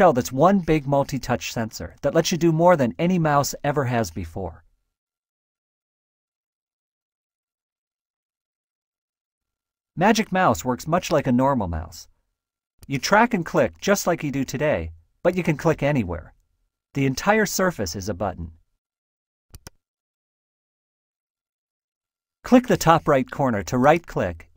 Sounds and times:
Speech: 0.0s - 4.6s, 10.0s - 12.1s, 12.9s - 16.4s, 17.0s - 18.6s, 22.5s - 24.5s.

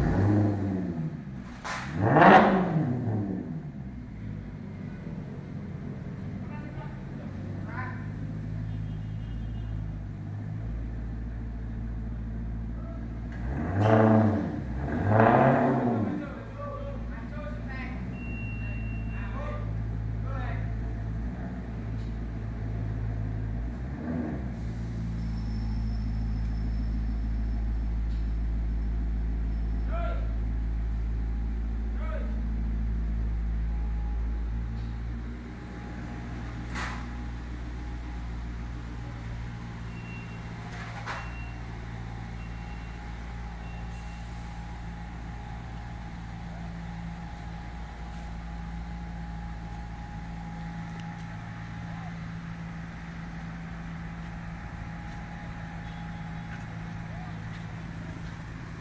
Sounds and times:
Car: 0.0s - 58.8s
Speech: 6.4s - 8.2s, 12.8s - 13.1s, 16.1s - 20.8s, 29.9s - 30.4s, 32.0s - 32.4s.

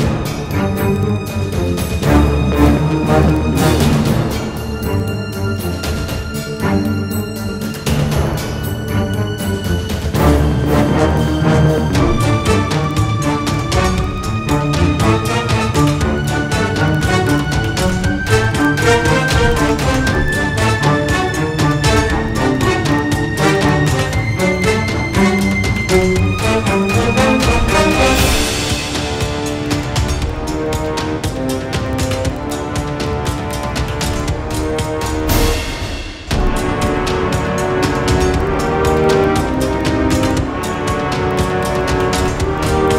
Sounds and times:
Music: 0.0s - 42.9s.

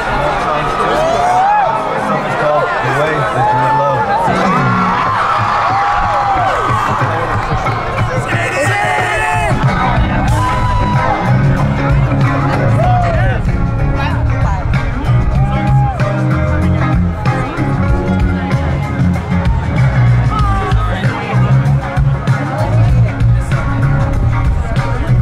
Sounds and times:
Music: 0.0s - 25.2s
Speech: 6.9s - 10.2s, 17.2s - 25.2s.

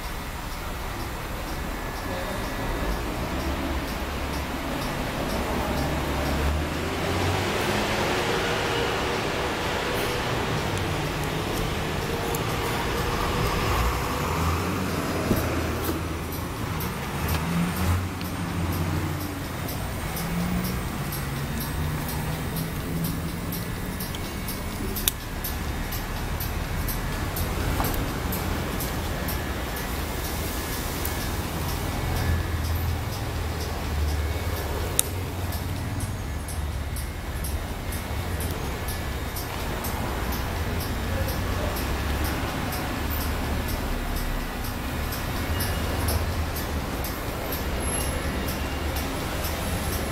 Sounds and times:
Music: 0.0s - 50.1s
Vehicle: 0.0s - 50.1s.

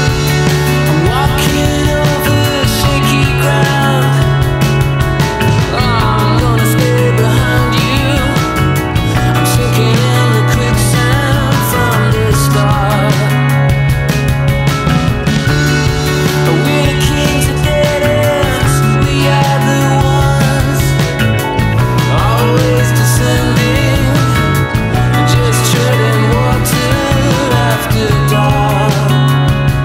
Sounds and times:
Music: 0.0s - 29.8s.

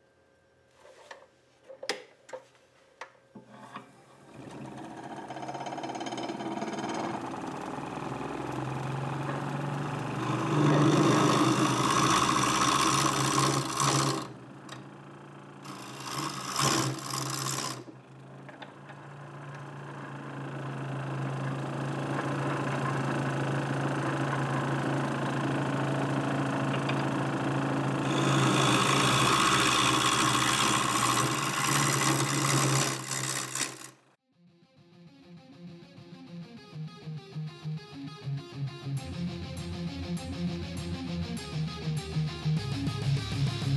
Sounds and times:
Wood: 3.4s - 14.9s, 15.6s - 20.2s, 21.2s - 25.6s, 28.0s - 34.0s
Tools: 4.5s - 7.4s, 10.2s - 14.8s, 15.7s - 17.9s, 28.1s - 34.0s.

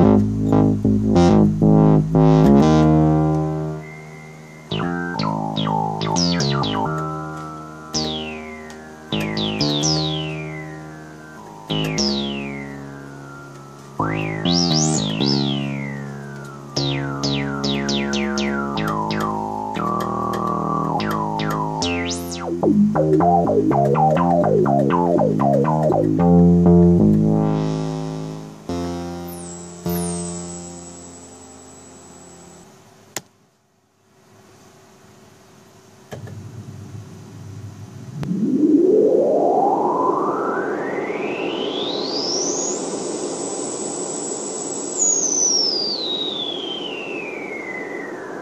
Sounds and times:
Sampler: 0.0s - 32.7s, 36.1s - 48.4s.

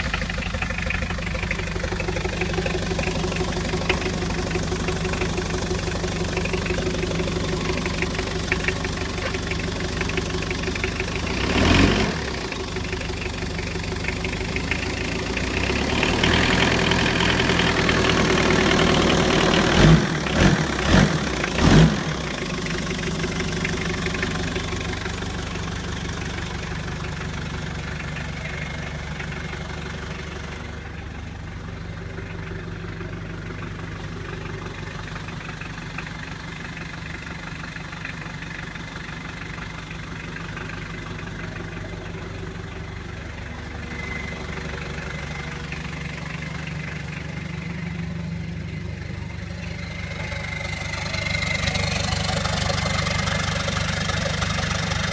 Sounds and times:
Idling: 0.0s - 55.1s
Vehicle: 0.0s - 55.1s.

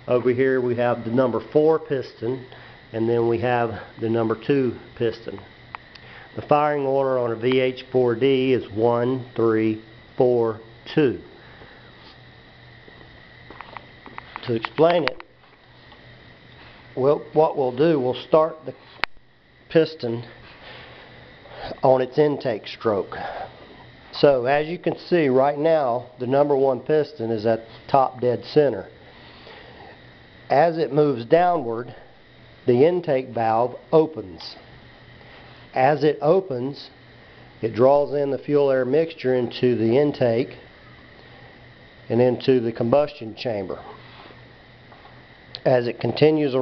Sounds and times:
Speech: 0.1s - 5.5s, 6.4s - 11.3s, 14.4s - 15.2s, 17.0s - 18.8s, 19.7s - 20.3s, 21.8s - 23.4s, 24.1s - 28.9s, 30.5s - 32.0s, 32.7s - 34.6s, 35.8s - 37.0s, 37.6s - 40.6s, 42.1s - 44.0s, 45.6s - 46.6s.

